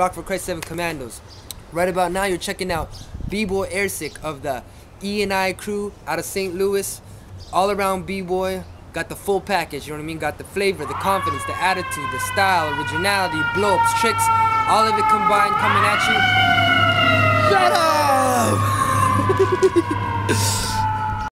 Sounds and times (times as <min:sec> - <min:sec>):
Speech: 0:01.8 - 0:07.0, 0:07.6 - 0:16.3, 0:17.5 - 0:18.6
Bellow: 0:10.8 - 0:21.2.